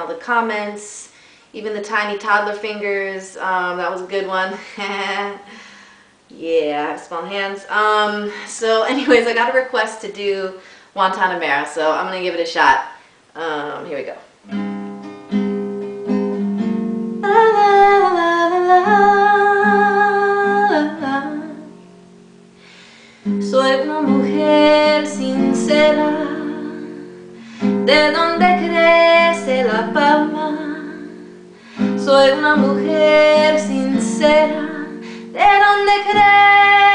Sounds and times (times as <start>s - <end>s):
Speech: 0.0s - 5.4s, 6.3s - 14.3s
Music: 14.5s - 36.9s
Female singing: 17.2s - 21.7s, 23.4s - 27.1s, 27.9s - 31.2s, 32.0s - 36.9s.